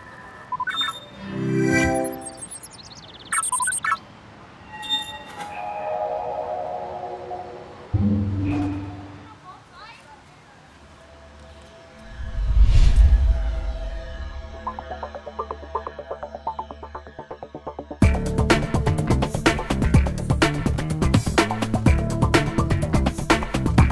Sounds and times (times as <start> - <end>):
Music: 1.2 - 2.6, 5.6 - 9.3, 11.0 - 23.9
Speech: 9.3 - 10.8.